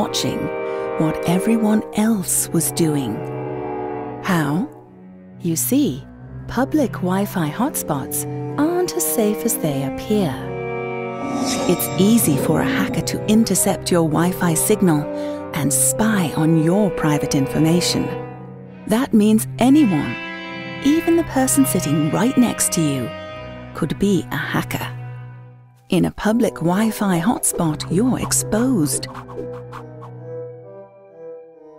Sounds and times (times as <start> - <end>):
Speech: 0.0 - 3.2, 4.2 - 4.7, 5.4 - 10.4, 11.6 - 18.2, 18.9 - 20.2, 20.8 - 23.1, 23.8 - 25.0, 25.9 - 29.1
Music: 0.0 - 31.7.